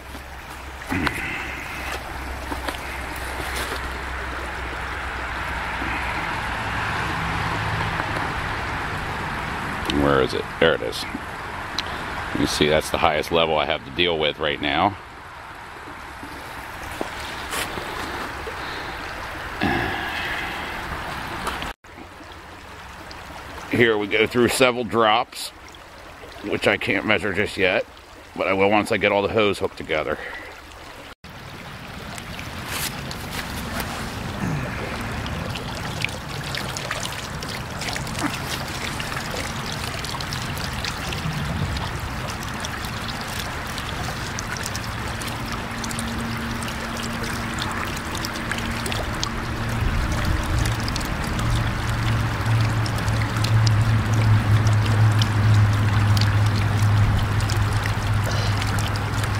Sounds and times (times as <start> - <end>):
Gurgling: 0.0 - 4.1, 5.4 - 7.3, 16.5 - 21.7, 32.8 - 59.3
Stream: 0.0 - 59.3
Speech: 9.9 - 11.2, 12.4 - 15.0, 23.7 - 25.6, 26.4 - 30.3.